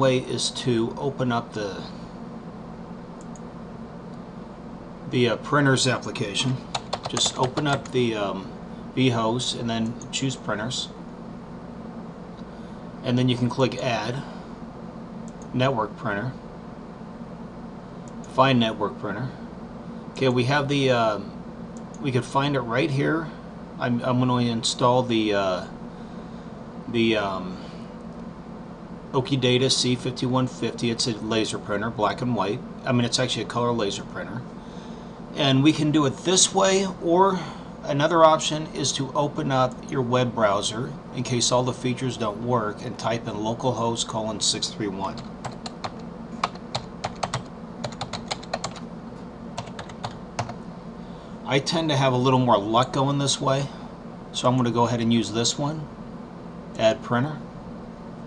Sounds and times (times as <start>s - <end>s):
Speech: 0.0s - 2.0s, 5.1s - 11.0s, 13.0s - 14.4s, 15.5s - 16.4s, 18.3s - 19.4s, 20.2s - 21.4s, 22.0s - 25.8s, 26.9s - 27.7s, 29.1s - 34.5s, 35.3s - 45.3s, 51.4s - 55.9s, 56.8s - 57.5s.